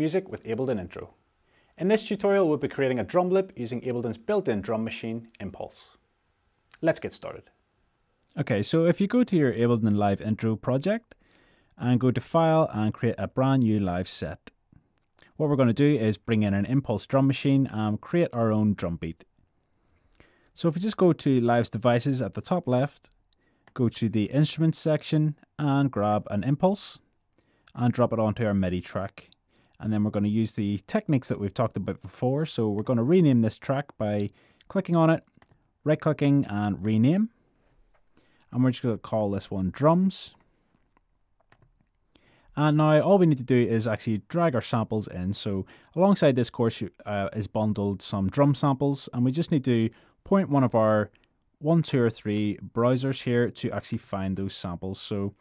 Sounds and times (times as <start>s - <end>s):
Speech: 0.0s - 1.2s, 1.8s - 6.0s, 6.8s - 7.6s, 8.3s - 11.2s, 11.8s - 14.6s, 15.3s - 19.3s, 20.6s - 23.2s, 23.8s - 27.0s, 27.7s - 37.4s, 38.5s - 40.4s, 42.6s - 55.4s.